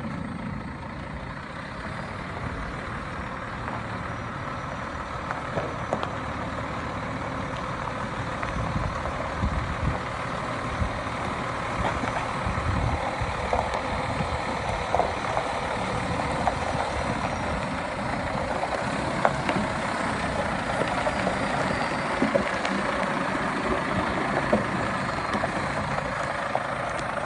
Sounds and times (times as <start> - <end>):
Truck: 0.0 - 27.2.